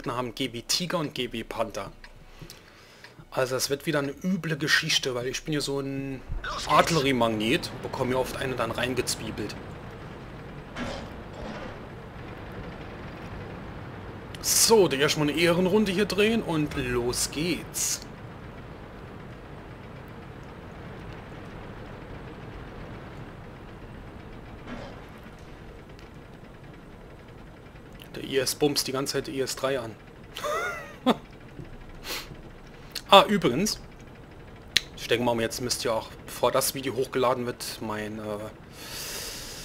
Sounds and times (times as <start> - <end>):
Speech: 0.0 - 2.0, 3.3 - 9.6, 14.4 - 18.1, 28.1 - 30.0, 33.0 - 33.8, 35.0 - 38.6.